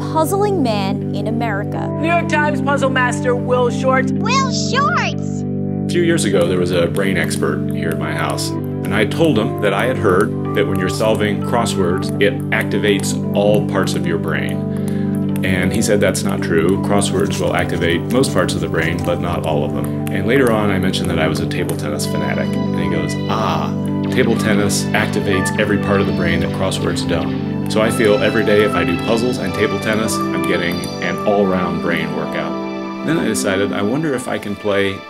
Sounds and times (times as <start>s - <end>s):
Speech: 0.0s - 3.2s, 4.2s - 14.6s, 15.4s - 35.0s
Music: 0.0s - 35.0s.